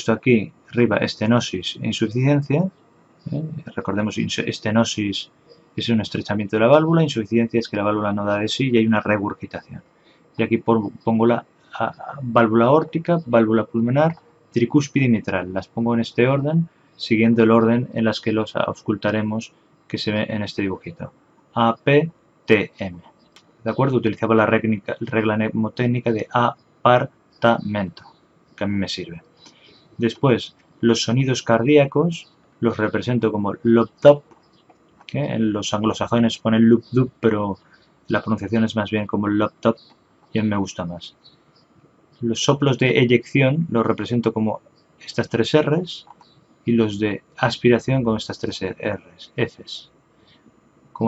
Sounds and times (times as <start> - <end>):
Speech: 0.0 - 2.7, 3.3 - 9.8, 10.4 - 23.1, 23.7 - 29.2, 30.0 - 34.3, 35.1 - 39.8, 40.4 - 41.2, 42.2 - 49.9.